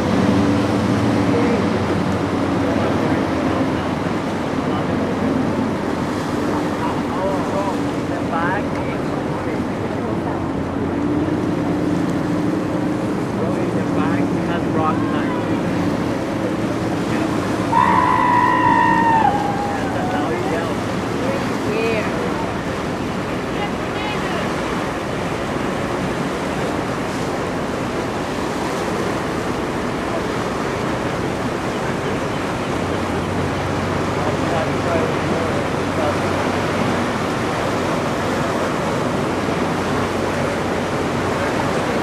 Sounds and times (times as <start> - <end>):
Wind: 0.0 - 42.0.